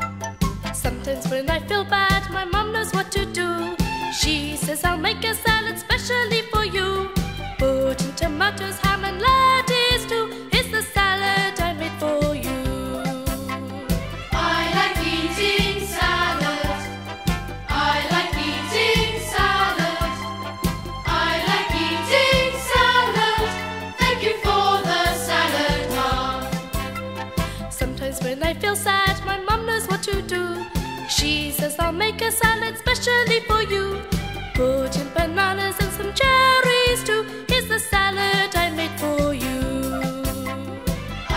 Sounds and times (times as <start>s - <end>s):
Music: 0.0s - 41.3s.